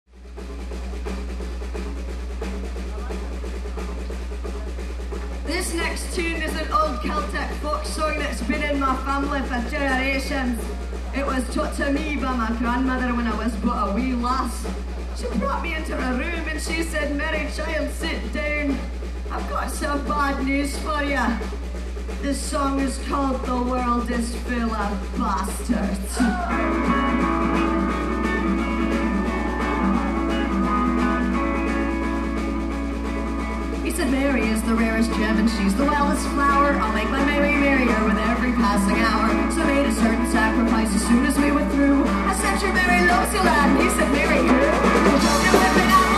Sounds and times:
Music: 0:00.1 - 0:46.1.

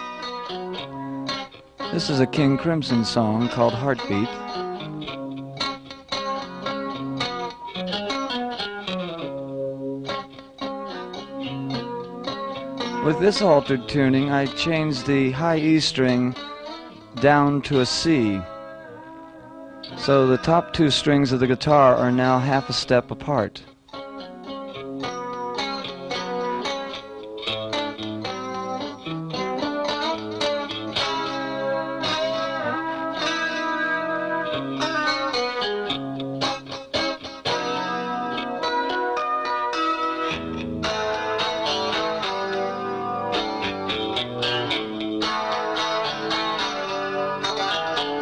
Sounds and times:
Music: 0:00.0 - 0:48.2
Speech: 0:01.9 - 0:04.4, 0:13.0 - 0:16.4, 0:17.2 - 0:18.5, 0:20.0 - 0:23.7.

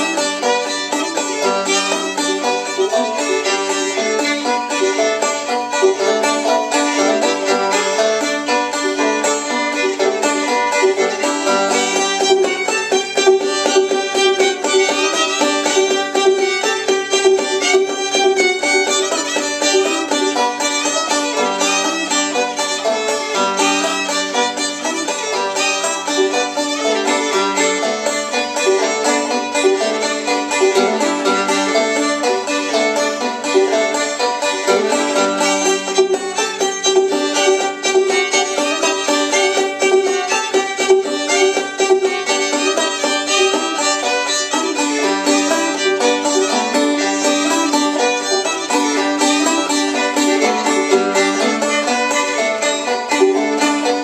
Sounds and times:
Pizzicato: 0:00.0 - 0:54.0.

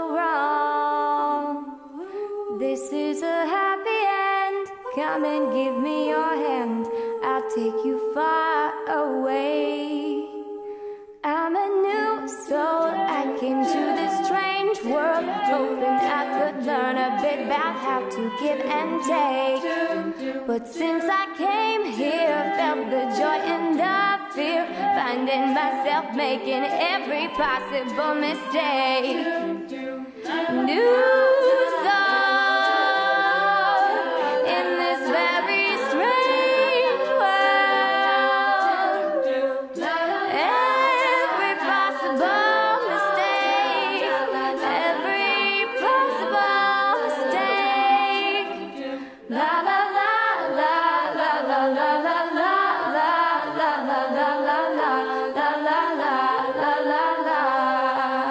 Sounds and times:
A capella: 0:00.0 - 0:58.3.

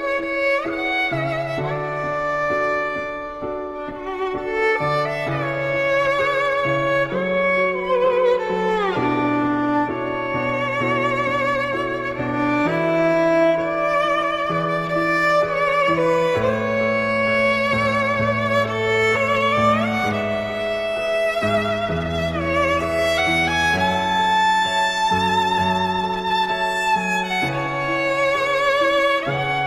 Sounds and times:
Violin, fiddle: 0:00.0 - 0:29.6.

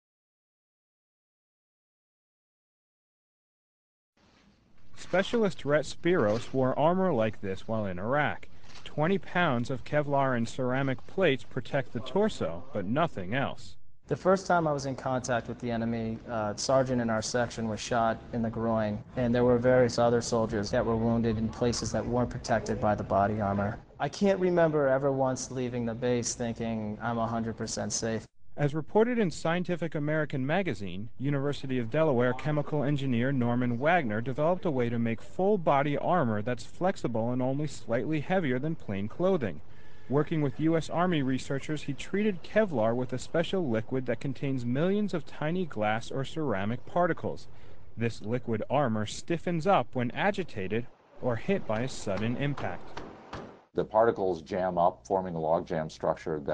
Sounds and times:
Speech: 0:05.0 - 0:52.9, 0:53.8 - 0:56.5.

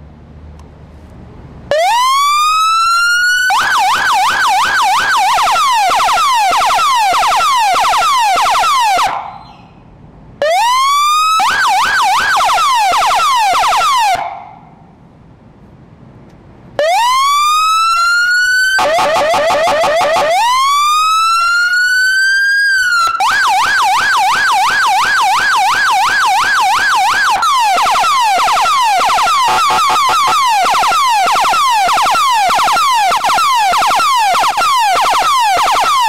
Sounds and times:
Police car (siren): 0:01.7 - 0:09.7, 0:10.4 - 0:14.7, 0:16.8 - 0:36.0.

